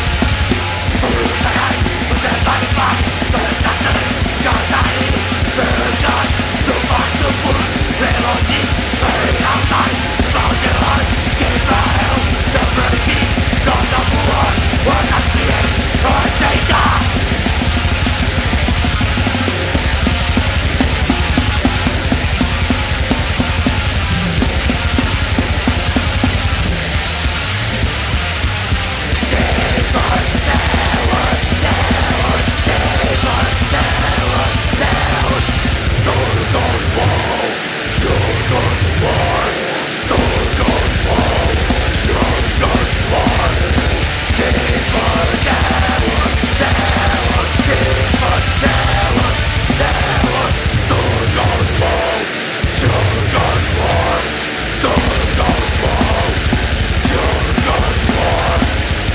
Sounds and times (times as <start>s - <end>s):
Music: 0.0s - 59.1s.